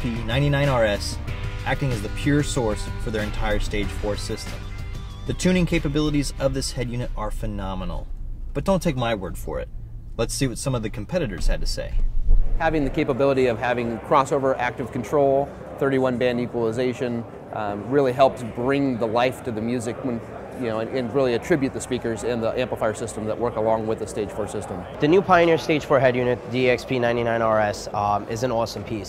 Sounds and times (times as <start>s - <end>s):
Speech: 0.0s - 4.6s, 5.3s - 12.0s, 12.6s - 29.0s.